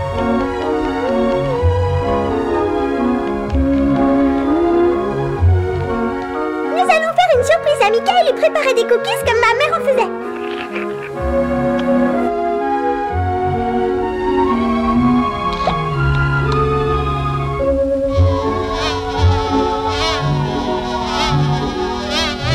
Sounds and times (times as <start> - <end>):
Music: 0.0 - 22.5
Speech: 6.7 - 10.2.